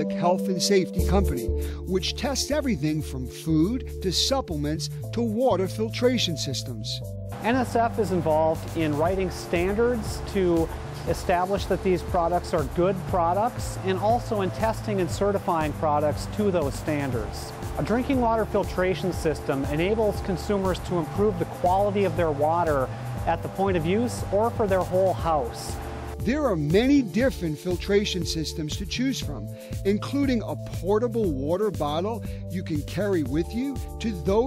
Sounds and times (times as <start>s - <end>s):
Music: 0.0s - 34.4s
Speech: 0.0s - 34.4s.